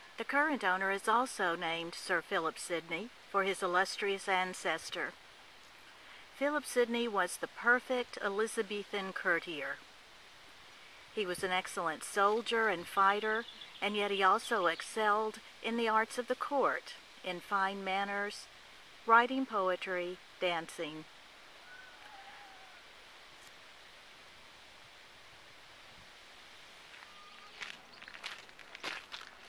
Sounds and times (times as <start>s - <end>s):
Speech: 0.2s - 5.1s, 6.4s - 9.8s, 11.2s - 18.5s, 19.1s - 21.0s
Walk, footsteps: 26.9s - 29.4s.